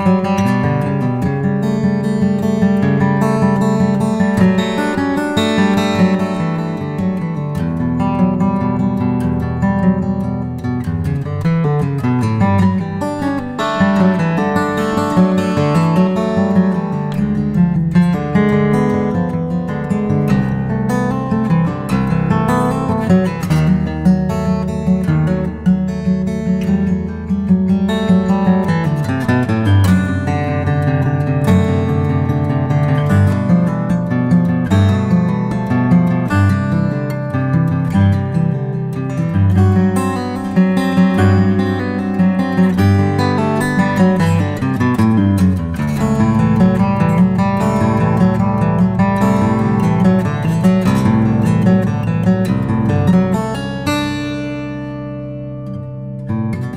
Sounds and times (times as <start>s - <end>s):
Acoustic guitar: 0.0s - 56.7s.